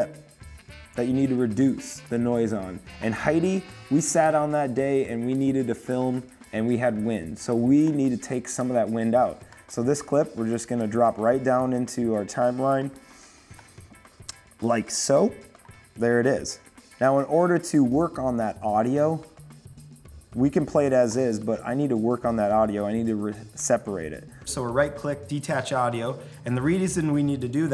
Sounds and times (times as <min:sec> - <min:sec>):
Music: 0:00.0 - 0:27.7
Speech: 0:01.0 - 0:13.0, 0:14.6 - 0:15.4, 0:16.0 - 0:19.2, 0:20.4 - 0:27.7.